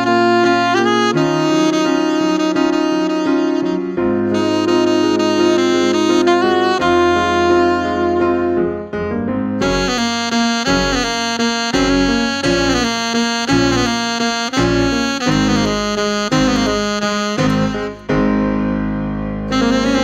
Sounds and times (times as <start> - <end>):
Electric piano: 0.0 - 20.0.